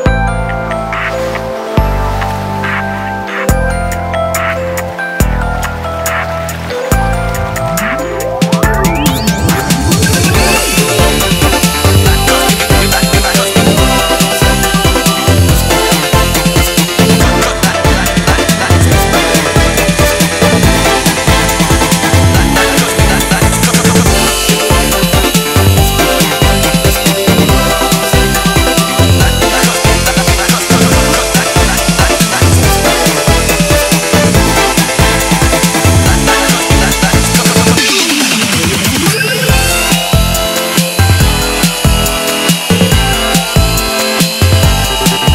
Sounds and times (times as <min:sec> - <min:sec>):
Music: 0:00.0 - 0:45.3.